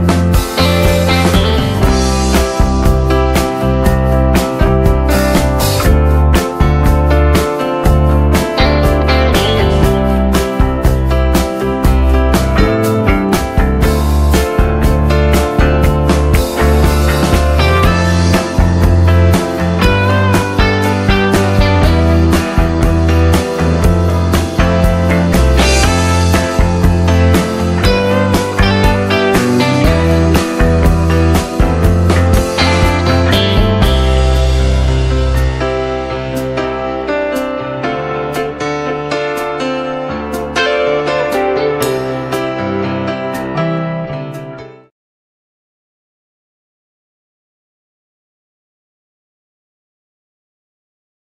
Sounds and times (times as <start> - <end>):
Keyboard (musical): 0.0 - 44.9.